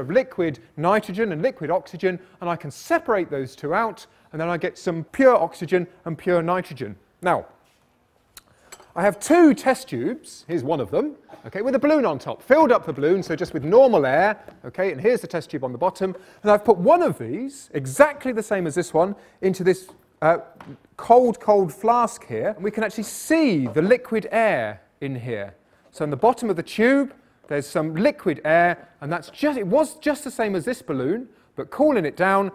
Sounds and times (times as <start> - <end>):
Speech: 0.0 - 7.6, 9.0 - 32.5.